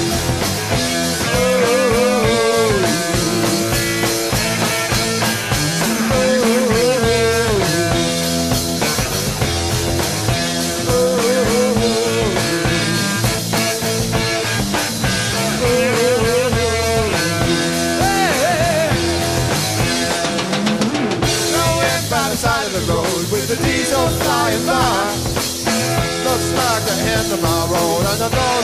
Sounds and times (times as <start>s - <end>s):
Psychedelic rock: 0.0s - 28.6s.